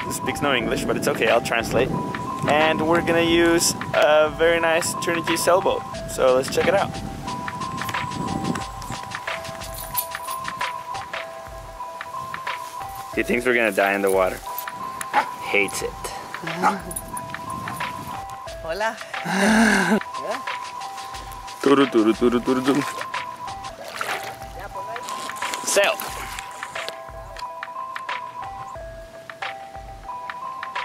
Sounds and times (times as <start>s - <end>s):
Music: 0.0s - 30.8s.